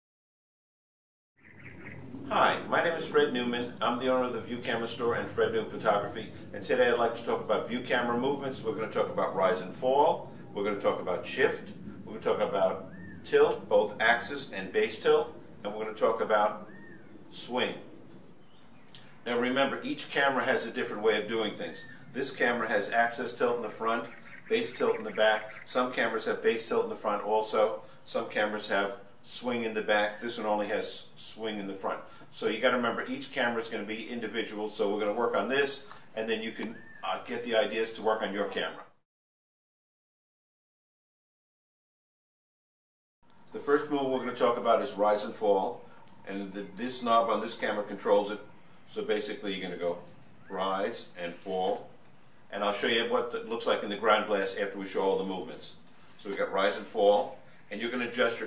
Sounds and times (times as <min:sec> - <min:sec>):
Speech: 0:02.3 - 0:16.7, 0:17.3 - 0:17.9, 0:19.2 - 0:39.0, 0:43.6 - 0:51.9, 0:52.5 - 0:58.4.